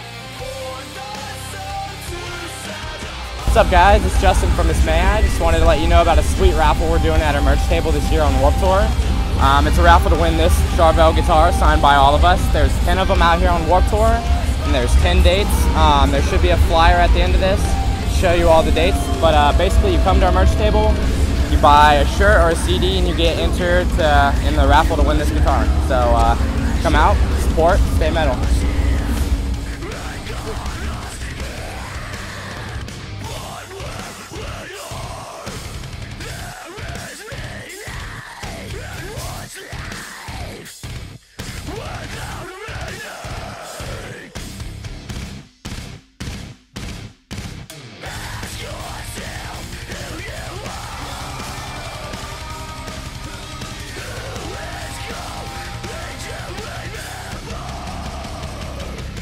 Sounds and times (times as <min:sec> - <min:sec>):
Guitar: 0:00.0 - 0:59.2
Speech: 0:03.4 - 0:35.3, 0:36.2 - 0:40.5, 0:41.7 - 0:44.4, 0:48.0 - 0:59.2.